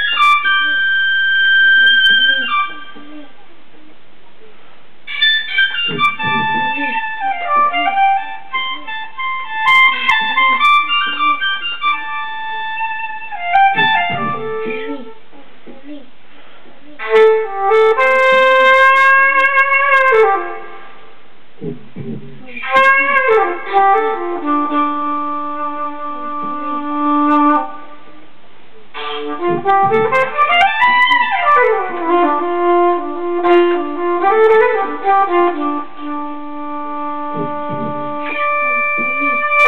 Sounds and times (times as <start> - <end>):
Speech: 1.8 - 4.6, 6.2 - 7.0, 9.9 - 11.4, 13.8 - 16.1, 22.0 - 23.2, 39.0 - 39.6.